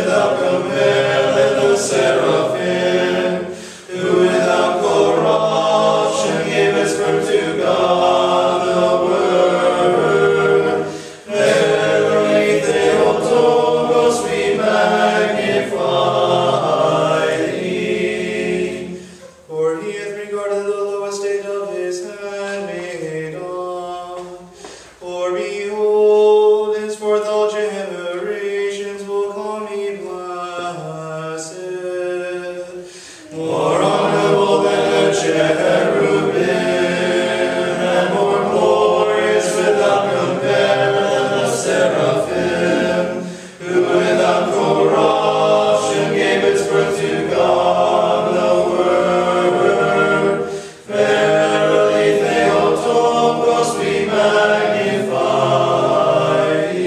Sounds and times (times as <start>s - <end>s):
Mantra: 0.0s - 56.8s.